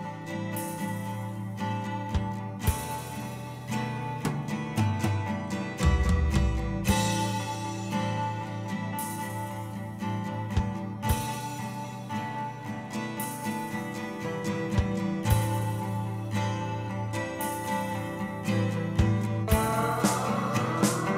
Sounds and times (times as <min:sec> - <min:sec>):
Music: 0:00.0 - 0:21.1.